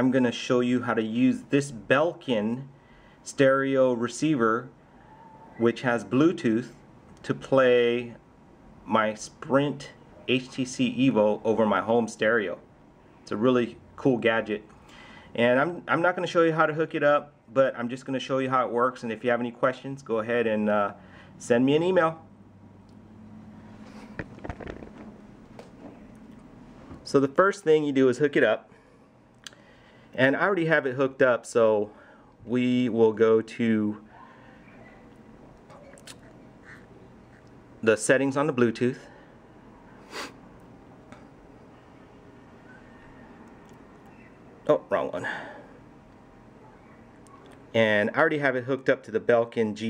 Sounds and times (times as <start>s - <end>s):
Speech: 0.0s - 4.8s, 5.6s - 8.2s, 8.9s - 12.7s, 13.3s - 14.7s, 15.4s - 22.2s, 27.0s - 28.7s, 30.2s - 34.2s, 37.8s - 39.1s, 44.6s - 45.4s, 47.7s - 49.9s.